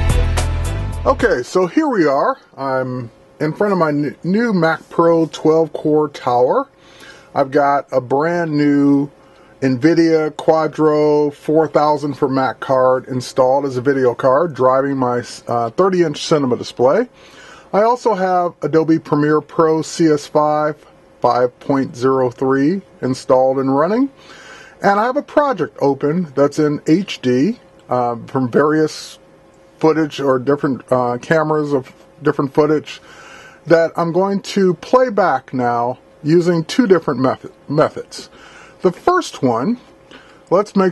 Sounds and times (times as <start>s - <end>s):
Speech: 1.0s - 24.2s, 24.8s - 29.2s, 29.8s - 39.9s, 40.5s - 40.9s.